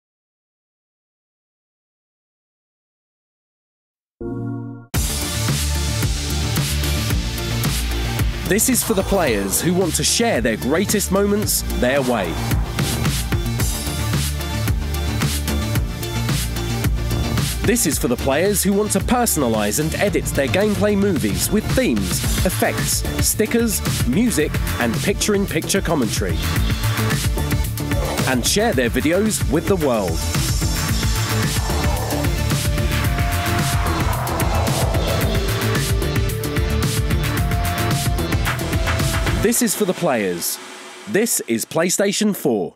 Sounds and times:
Music: 4.2s - 42.7s
Speech: 8.5s - 12.4s, 17.6s - 26.5s, 28.2s - 30.2s, 39.4s - 42.7s.

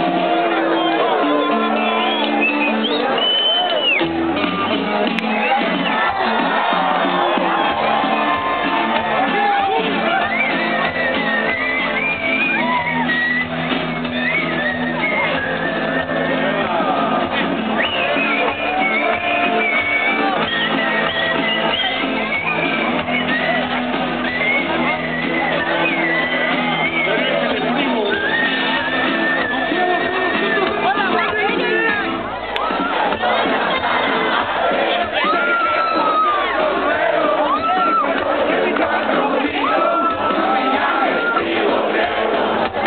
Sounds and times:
Speech: 9.0s - 10.4s, 24.6s - 42.4s.

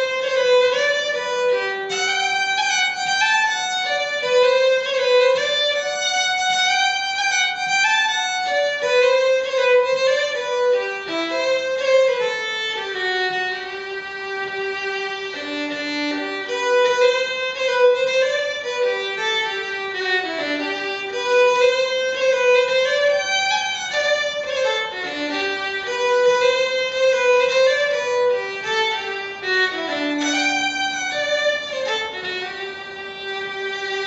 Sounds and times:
Violin, fiddle: 0.0s - 34.0s.

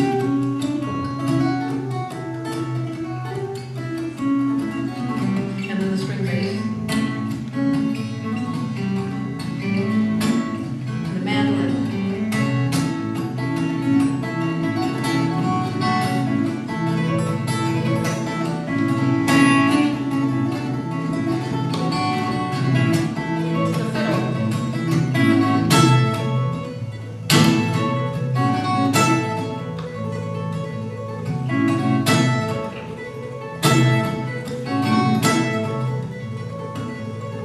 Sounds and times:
Acoustic guitar: 0.0s - 37.4s.

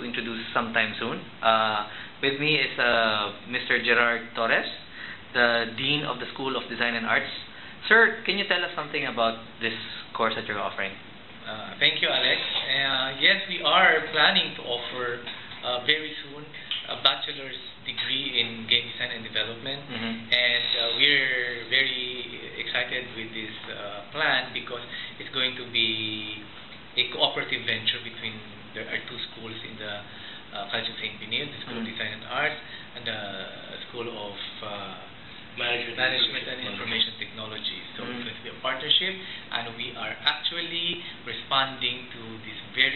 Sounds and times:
Speech: 0.0s - 42.9s.

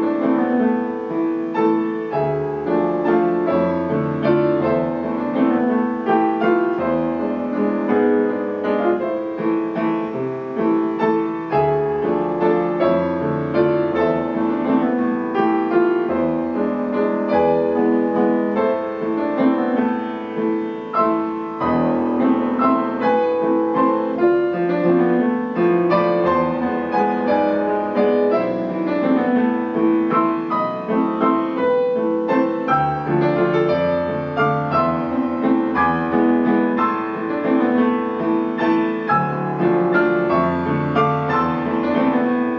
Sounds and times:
Classical music: 0.0s - 42.5s
Piano: 0.0s - 42.5s.

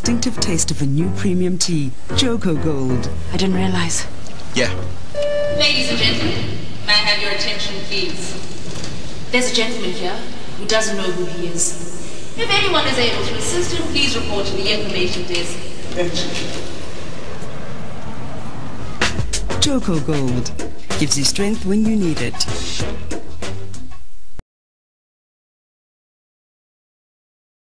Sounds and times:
Speech: 0.0s - 4.8s, 19.5s - 22.6s
Music: 0.0s - 6.7s, 18.9s - 24.2s.

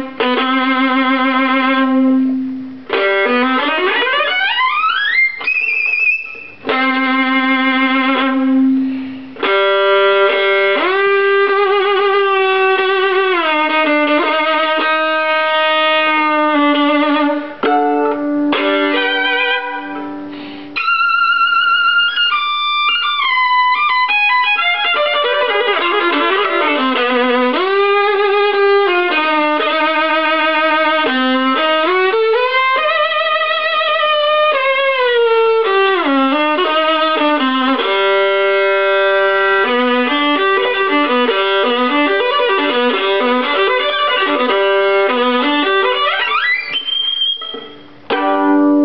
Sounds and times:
Violin, fiddle: 0.0s - 48.8s.

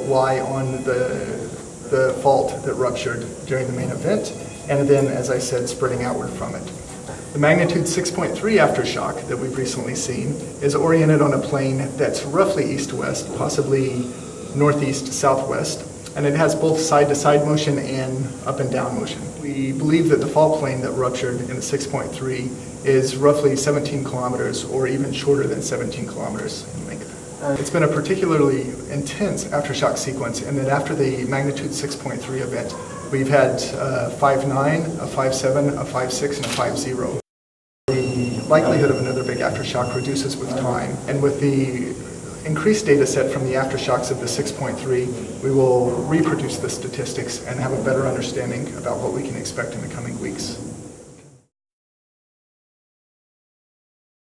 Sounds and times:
Speech: 0.0s - 6.8s, 7.4s - 37.2s, 37.9s - 50.7s.

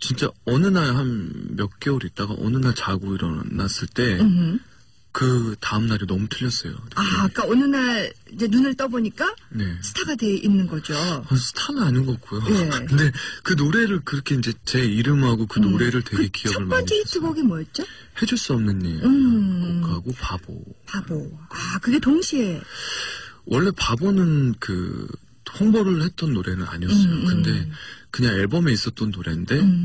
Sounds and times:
Speech: 0.0s - 4.5s, 11.0s - 17.4s, 23.5s - 29.8s.

